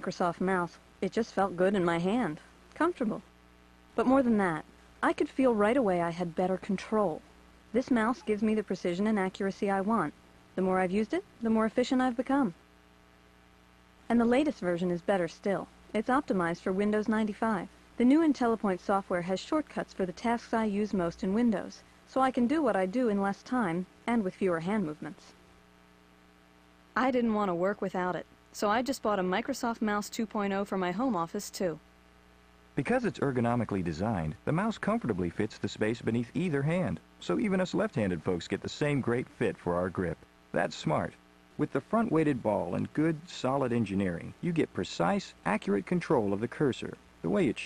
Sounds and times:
Speech: 0:00.0 - 0:03.3, 0:04.0 - 0:07.2, 0:07.8 - 0:12.6, 0:14.1 - 0:25.3, 0:27.0 - 0:31.8, 0:32.8 - 0:47.6.

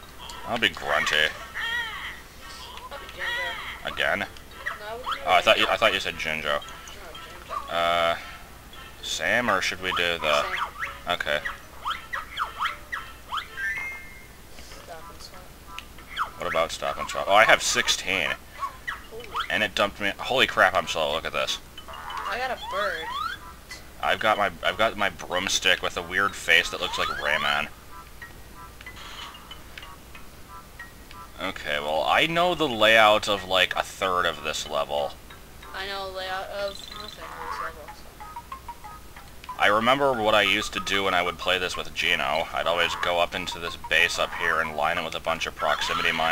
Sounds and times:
Speech: 0:09.1 - 0:11.4, 0:14.7 - 0:15.5, 0:35.8 - 0:38.0, 0:39.6 - 0:46.3.

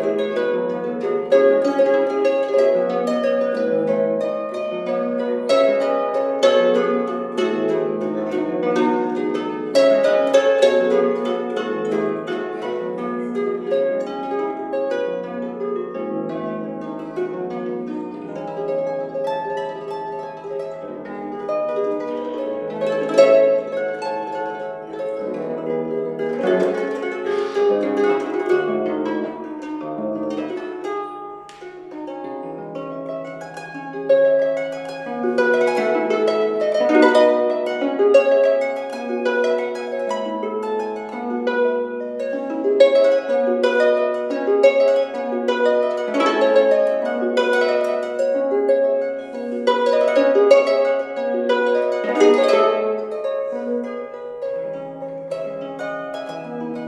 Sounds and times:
Harp: 0:00.0 - 0:56.8
Pizzicato: 0:00.0 - 0:56.8.

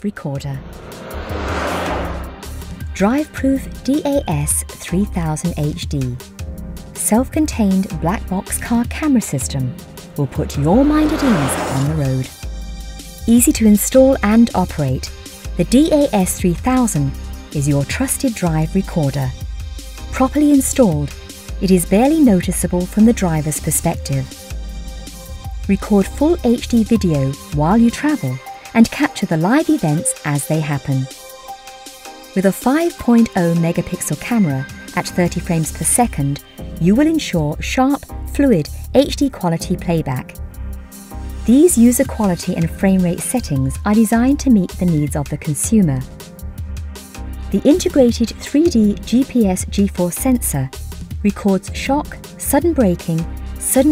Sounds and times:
Speech: 0:00.0 - 0:00.6, 0:03.0 - 0:06.2, 0:07.0 - 0:12.3, 0:13.2 - 0:19.4, 0:20.2 - 0:24.3, 0:25.7 - 0:31.1, 0:32.4 - 0:40.3, 0:41.5 - 0:46.1, 0:47.5 - 0:53.9
Music: 0:00.0 - 0:53.9.

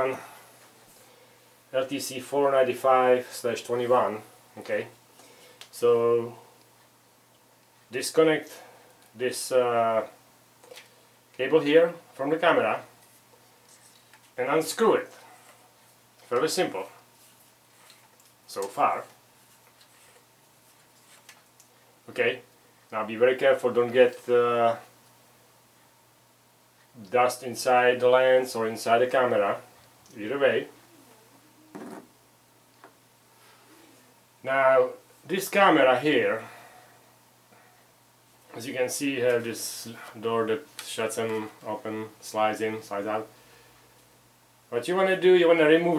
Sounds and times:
Speech: 0:00.0 - 0:00.2, 0:01.7 - 0:05.0, 0:05.7 - 0:06.4, 0:07.9 - 0:10.2, 0:11.4 - 0:12.9, 0:14.4 - 0:15.2, 0:16.3 - 0:17.0, 0:18.5 - 0:19.2, 0:22.1 - 0:24.9, 0:27.0 - 0:30.8, 0:34.4 - 0:36.5, 0:38.5 - 0:43.3, 0:44.7 - 0:45.9.

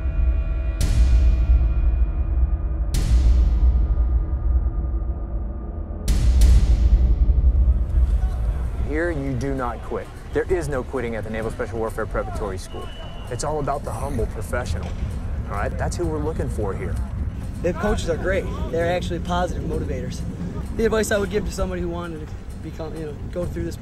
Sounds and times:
Speech: 0:08.9 - 0:14.9, 0:17.6 - 0:23.8.

